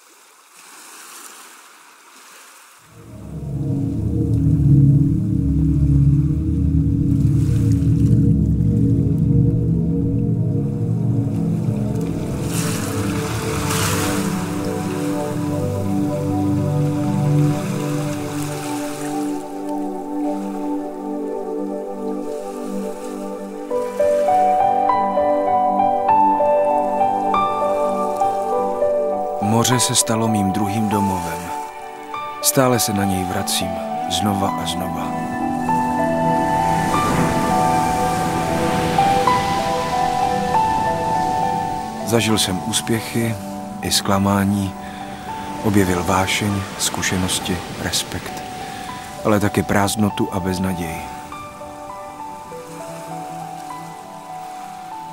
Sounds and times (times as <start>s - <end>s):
Music: 2.9s - 55.1s.